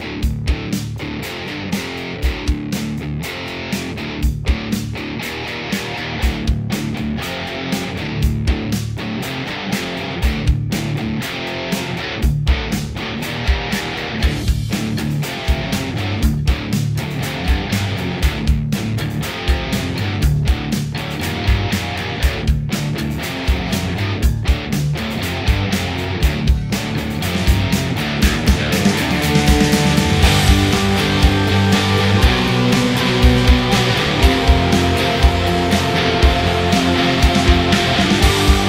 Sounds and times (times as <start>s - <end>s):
Music: 0.0s - 38.6s.